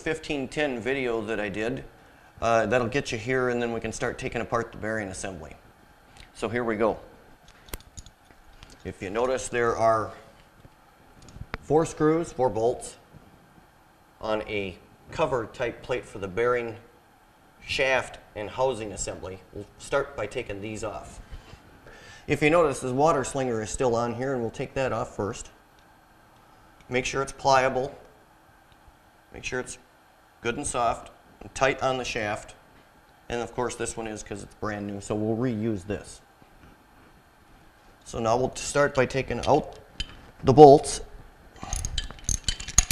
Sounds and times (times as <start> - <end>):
Speech: 0.0 - 5.6, 6.4 - 7.1, 8.9 - 10.3, 11.6 - 13.0, 14.2 - 16.9, 17.6 - 21.2, 22.3 - 25.6, 26.9 - 28.0, 29.4 - 32.6, 33.3 - 36.3, 38.0 - 39.8, 40.4 - 41.1.